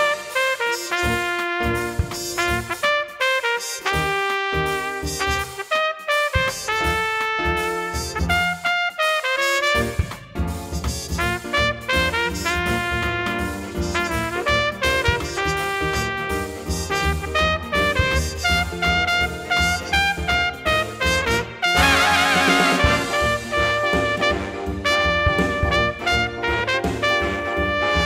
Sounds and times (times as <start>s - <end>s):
Trumpet: 0.0s - 28.0s.